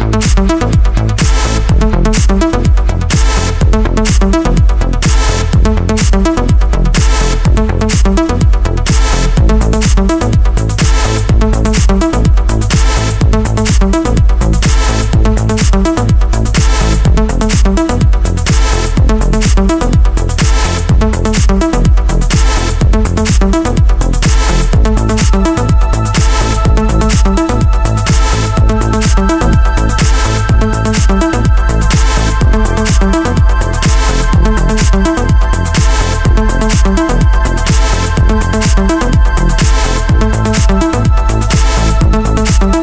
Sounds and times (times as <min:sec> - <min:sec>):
Music: 0:00.0 - 0:42.8.